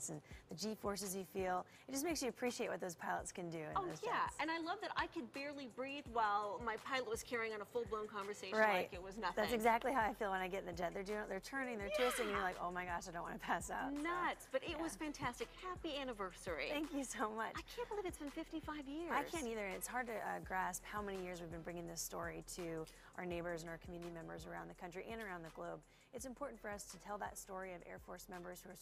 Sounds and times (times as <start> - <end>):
Music: 0.0 - 28.8
Speech: 7.0 - 22.6.